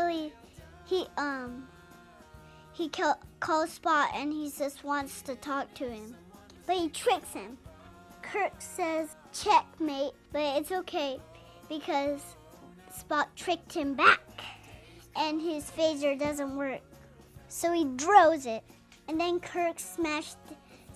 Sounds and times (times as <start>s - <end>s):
Child speech, kid speaking: 0.0s - 1.7s, 2.8s - 7.6s, 8.2s - 14.6s, 15.2s - 16.9s, 17.5s - 20.6s
Inside, small room: 0.0s - 20.9s
Music: 0.0s - 20.9s.